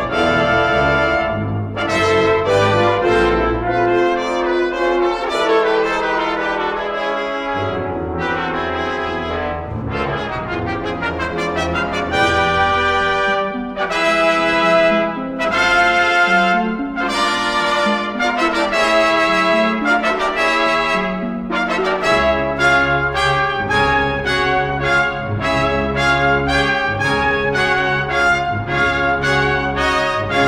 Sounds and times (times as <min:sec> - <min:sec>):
Trombone: 0:00.0 - 0:30.4
Trumpet: 0:00.0 - 0:30.4.